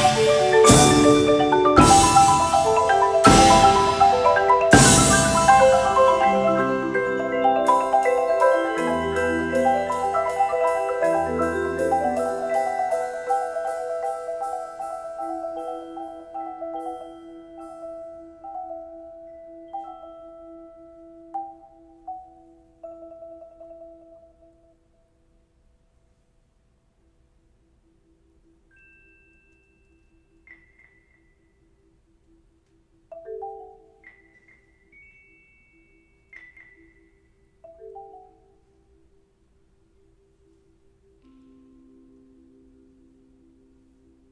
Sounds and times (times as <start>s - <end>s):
Marimba, xylophone: 0.0s - 24.8s, 28.6s - 31.8s, 33.0s - 39.2s.